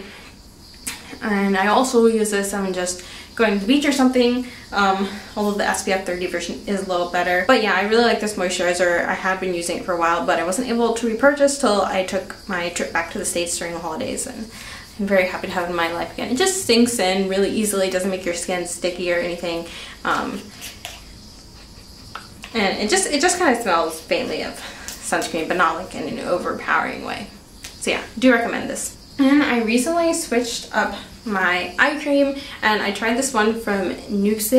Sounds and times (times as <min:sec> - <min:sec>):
Speech: 0:00.9 - 0:20.5, 0:22.4 - 0:34.5.